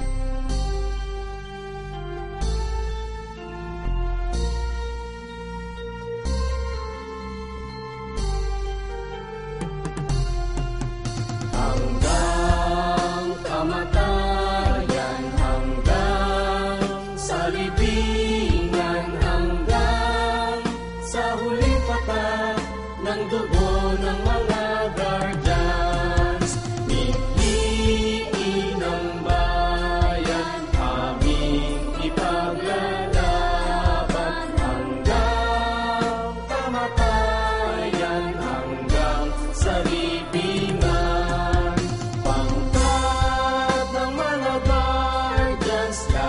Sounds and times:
Music of Asia: 0.0s - 46.2s.

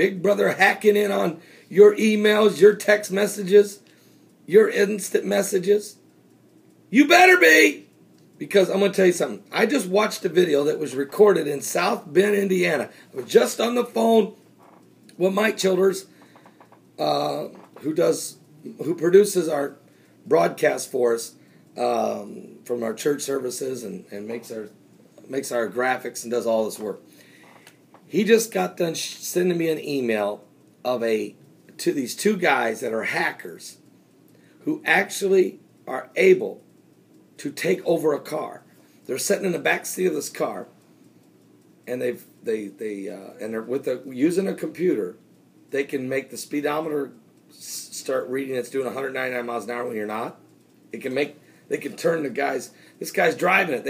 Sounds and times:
Speech: 0.0s - 3.8s, 4.5s - 6.0s, 6.9s - 14.4s, 15.1s - 16.1s, 17.0s - 27.0s, 28.1s - 33.8s, 34.6s - 36.6s, 37.4s - 40.8s, 41.9s - 53.8s.

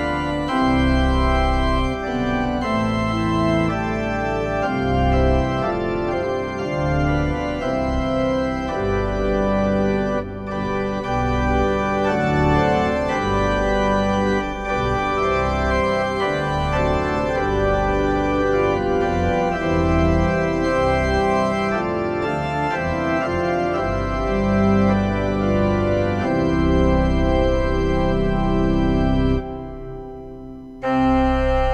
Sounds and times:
Electronic organ: 0.0s - 31.7s
Hammond organ: 0.0s - 31.7s.

